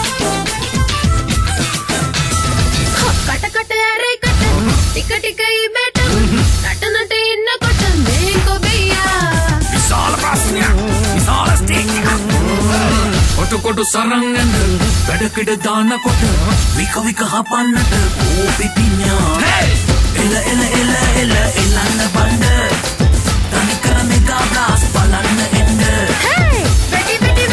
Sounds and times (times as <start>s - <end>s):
Music: 0.0s - 27.5s.